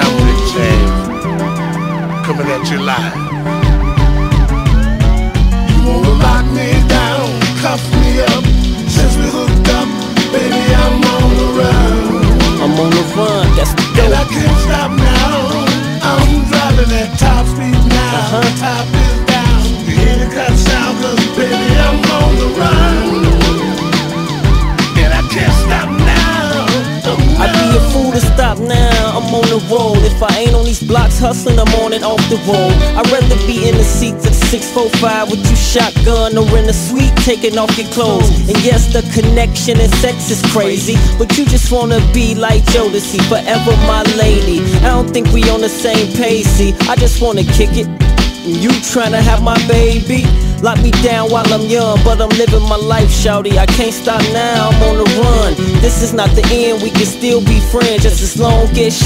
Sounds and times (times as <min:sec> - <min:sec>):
Music: 0:00.0 - 0:59.0.